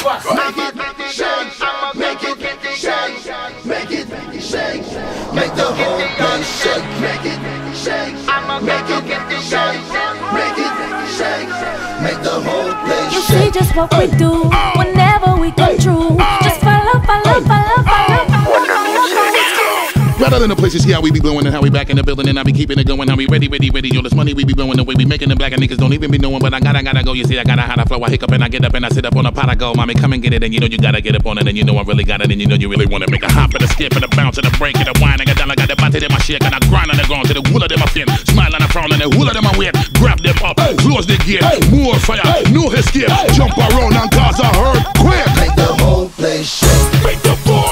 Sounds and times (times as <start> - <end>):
Music: 0.0 - 47.7.